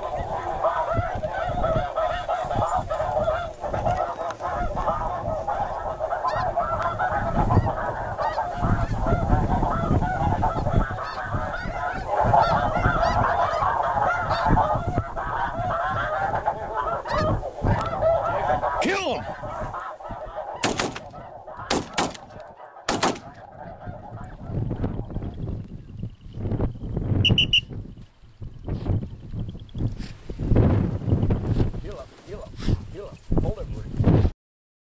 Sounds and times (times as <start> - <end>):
Goose: 0.0 - 25.4.